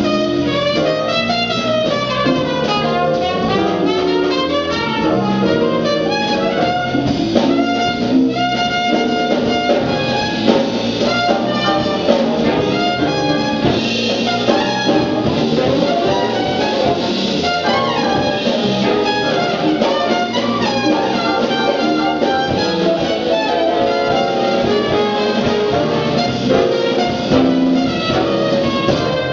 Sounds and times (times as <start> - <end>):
Blues: 0.0 - 29.3
Trumpet: 0.0 - 29.3.